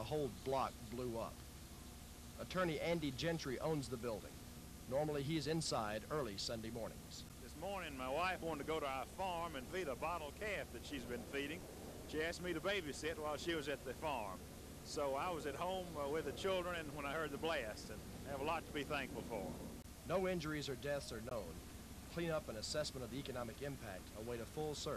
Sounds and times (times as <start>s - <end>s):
Speech: 0.0s - 1.4s, 2.4s - 19.5s, 20.1s - 24.9s.